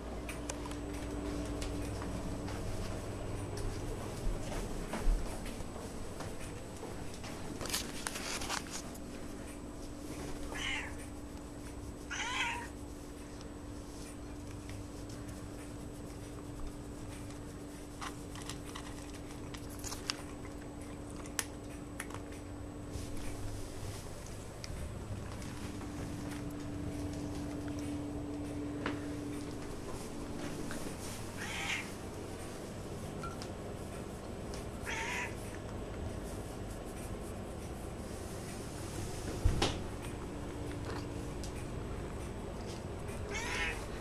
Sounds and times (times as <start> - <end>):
Meow: 10.6 - 11.0, 12.1 - 12.7, 31.4 - 31.9, 34.8 - 35.4, 43.3 - 43.8.